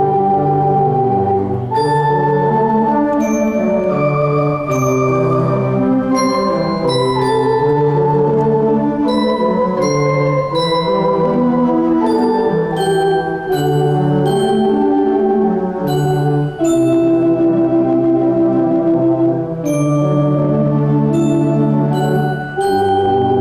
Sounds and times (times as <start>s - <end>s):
Organ: 0.0s - 23.4s.